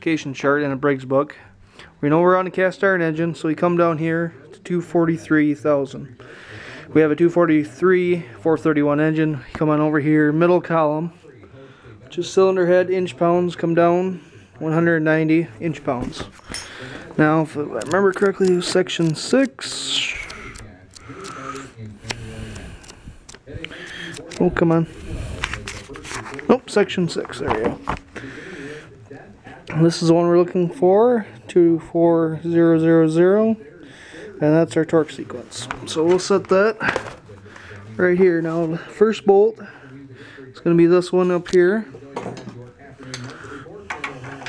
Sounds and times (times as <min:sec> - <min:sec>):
Speech: 0:00.0 - 0:44.4.